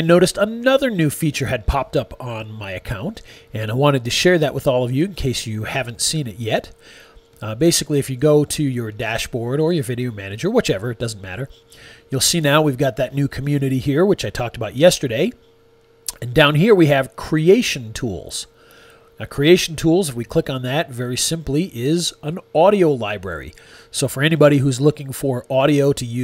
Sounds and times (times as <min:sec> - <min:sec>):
Speech: 0:00.0 - 0:06.8, 0:07.4 - 0:15.4, 0:16.1 - 0:18.5, 0:19.2 - 0:26.2.